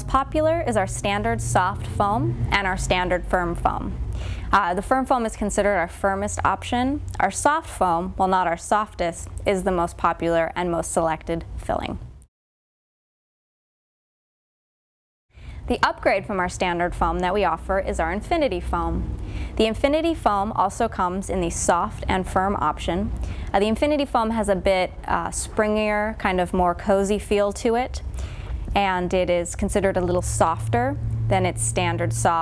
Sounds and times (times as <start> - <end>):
Speech: 0.0 - 12.0, 15.7 - 19.0, 19.6 - 28.0, 28.7 - 32.4.